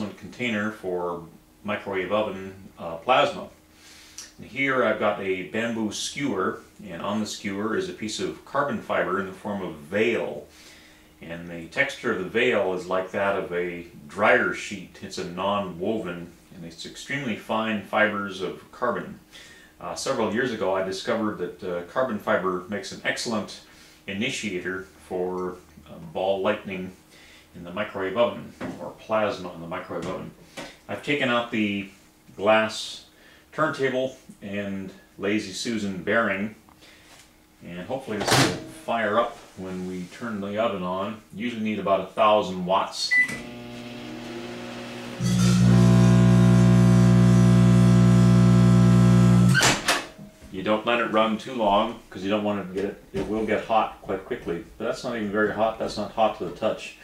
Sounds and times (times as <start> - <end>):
Speech: 0.0 - 3.6, 4.2 - 10.5, 11.2 - 19.2, 19.8 - 27.0, 27.6 - 36.6, 37.6 - 43.2, 50.4 - 57.0.